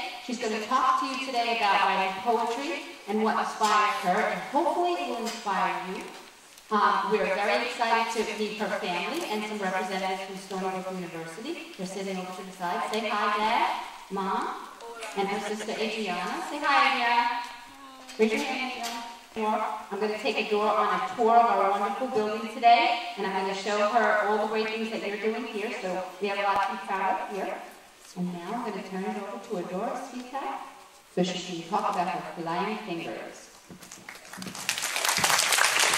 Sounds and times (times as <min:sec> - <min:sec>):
Female speech, woman speaking: 0:00.0 - 0:33.5
Narration, monologue: 0:00.0 - 0:33.9.